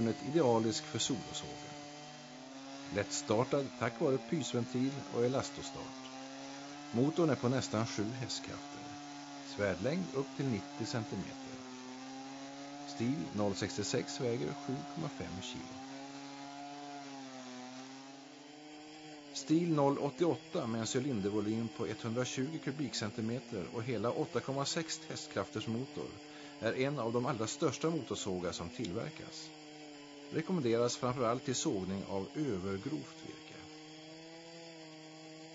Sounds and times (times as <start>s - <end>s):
Speech: 0.0s - 1.6s, 2.9s - 6.0s, 7.0s - 11.5s, 12.9s - 15.8s, 19.4s - 29.5s, 30.4s - 33.7s.